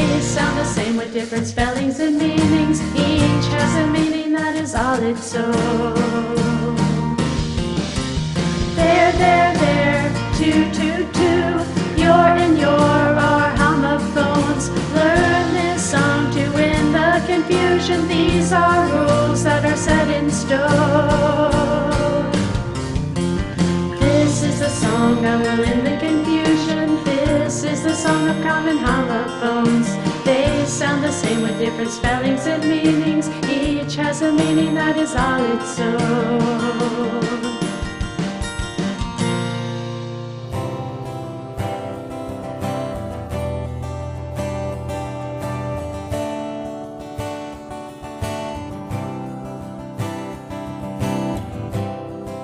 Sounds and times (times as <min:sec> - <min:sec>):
Music for children: 0:07.3 - 0:35.5.